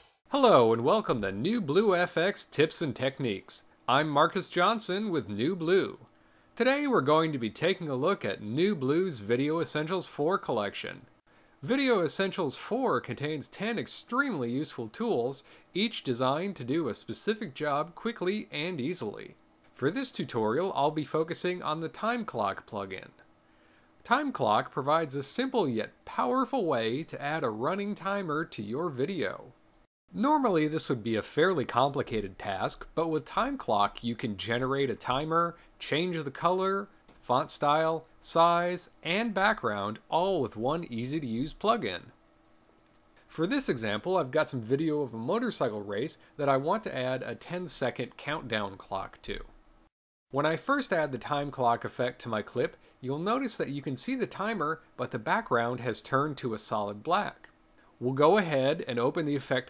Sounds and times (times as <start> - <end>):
Speech: 0.3 - 23.3, 24.0 - 42.2, 43.3 - 49.6, 50.3 - 59.7.